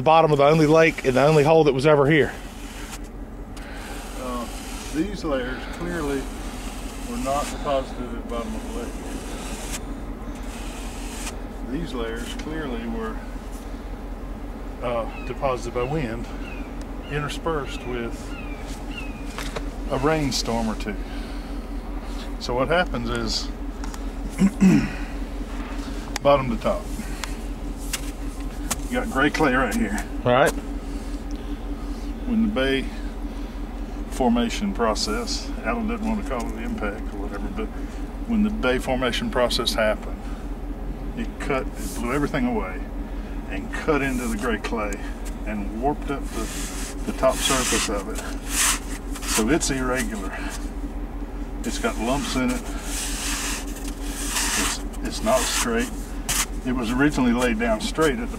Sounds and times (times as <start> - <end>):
Speech: 0.0 - 2.4, 4.2 - 6.3, 7.1 - 9.2, 11.7 - 13.2, 14.8 - 16.3, 17.1 - 18.2, 19.9 - 21.0, 22.4 - 23.5, 26.2 - 26.9, 28.9 - 30.6, 32.2 - 33.0, 34.1 - 40.2, 41.2 - 42.9, 43.5 - 46.5, 47.1 - 48.3, 49.4 - 50.6, 51.6 - 52.7, 54.6 - 55.9, 56.6 - 58.3.